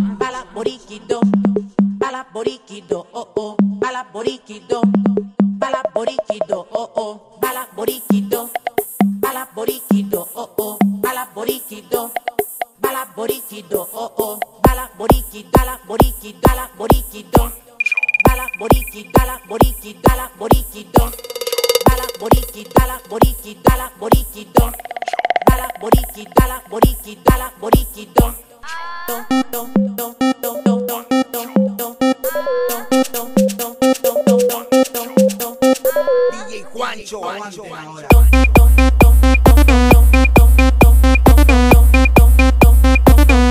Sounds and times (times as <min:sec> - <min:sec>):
Music: 0:00.0 - 0:06.7, 0:07.4 - 0:17.6, 0:18.2 - 0:36.6, 0:38.1 - 0:43.5.